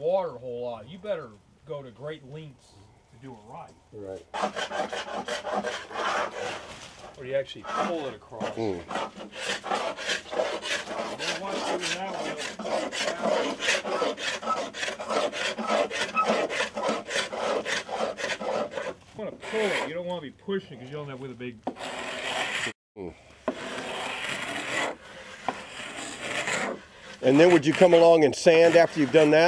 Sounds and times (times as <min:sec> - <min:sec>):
Rub: 0:04.4 - 0:19.9, 0:20.9 - 0:22.7, 0:23.5 - 0:29.4.